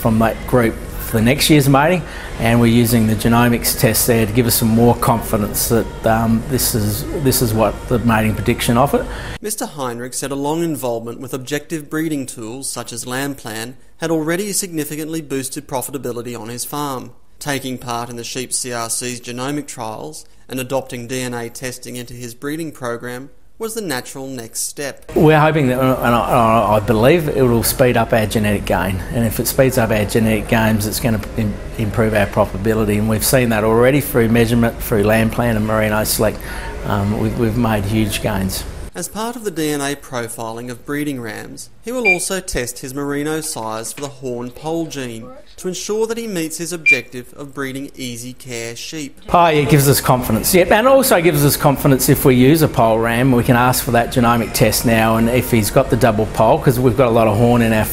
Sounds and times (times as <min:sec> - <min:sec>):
Speech: 0:00.0 - 0:57.9.